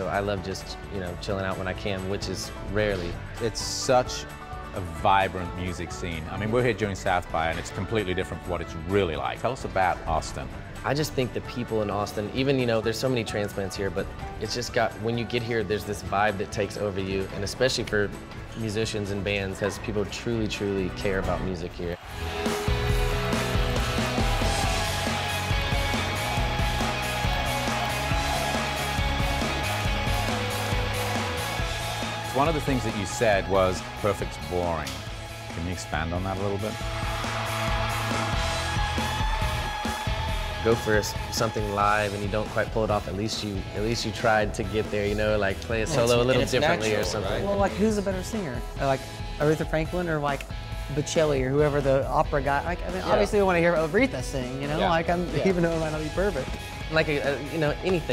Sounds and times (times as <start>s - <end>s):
Guitar: 0.0s - 58.1s.